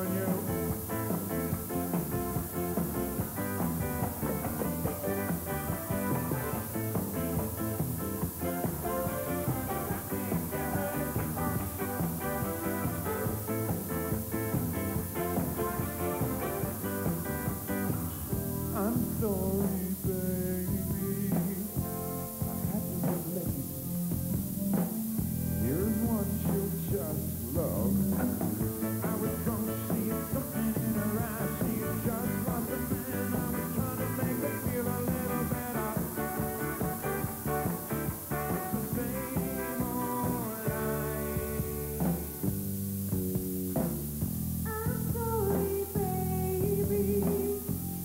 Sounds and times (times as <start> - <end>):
Jazz: 0.0 - 48.0
Singing: 8.4 - 13.4, 24.5 - 42.3, 44.7 - 47.9.